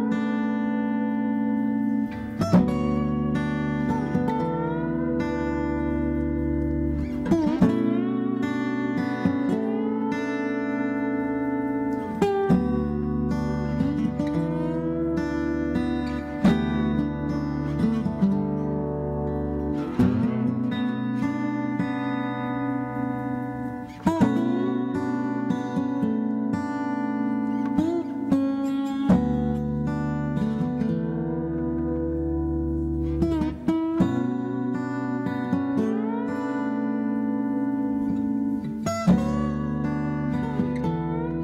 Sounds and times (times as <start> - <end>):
Acoustic guitar: 0.0 - 41.4.